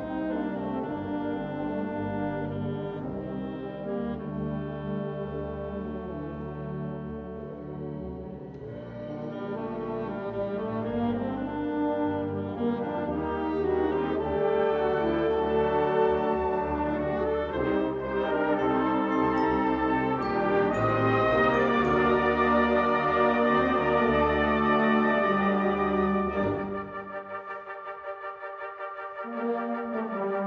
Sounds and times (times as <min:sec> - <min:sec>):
Music: 0:00.0 - 0:30.4.